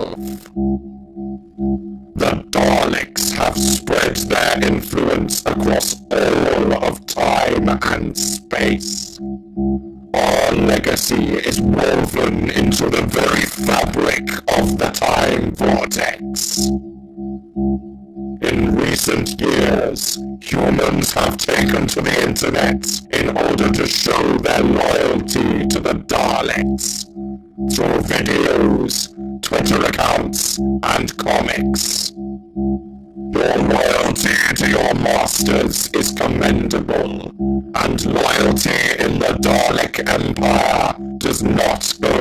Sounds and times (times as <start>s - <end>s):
Speech: 0.0s - 0.5s, 2.2s - 9.2s, 10.2s - 16.7s, 18.4s - 27.1s, 27.7s - 32.1s, 33.4s - 42.2s.